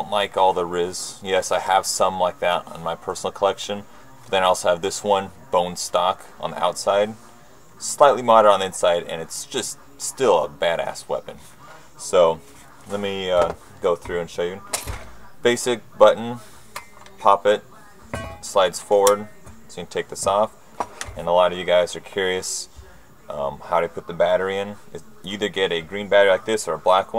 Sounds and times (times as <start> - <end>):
Speech: 0.0 - 27.1.